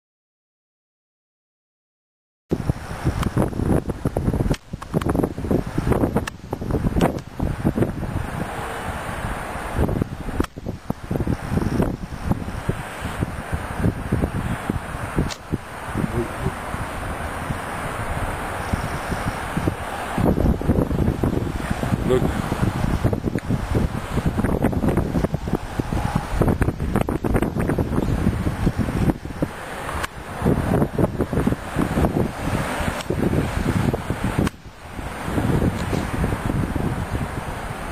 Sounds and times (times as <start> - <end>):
Wind noise (microphone): 2.5 - 37.9.